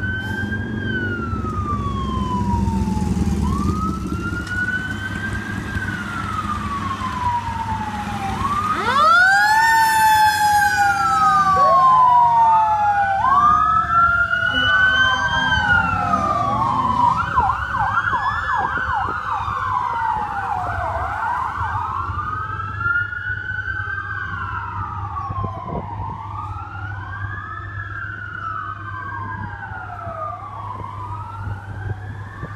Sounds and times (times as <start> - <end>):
Fire engine, fire truck (siren): 0.0 - 32.5
Truck: 0.0 - 32.5.